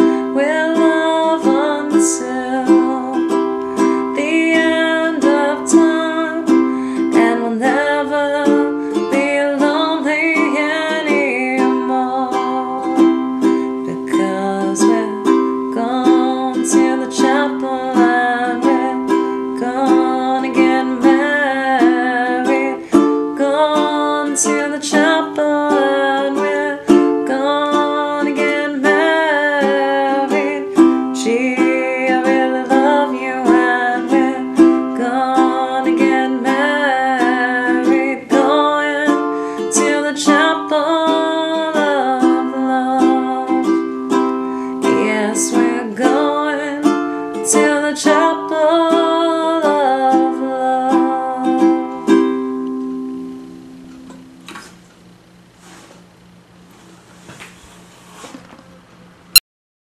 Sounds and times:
Ukulele: 0:00.0 - 0:54.8.

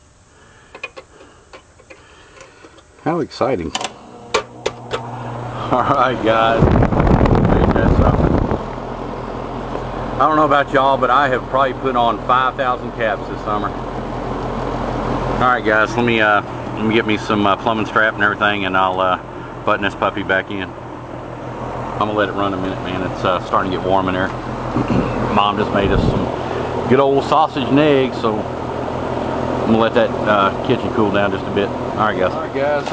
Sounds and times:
Mechanical fan: 0:00.0 - 0:32.9.

